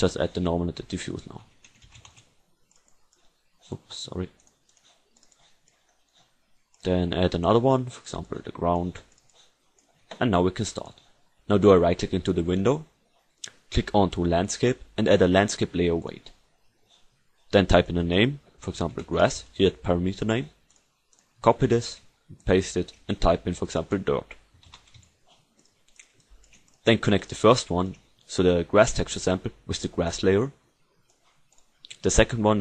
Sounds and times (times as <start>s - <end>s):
Speech: 0.0s - 1.5s, 3.7s - 4.4s, 6.8s - 9.1s, 10.1s - 12.9s, 13.5s - 16.4s, 17.5s - 20.6s, 21.4s - 24.4s, 26.8s - 30.6s, 31.9s - 32.6s.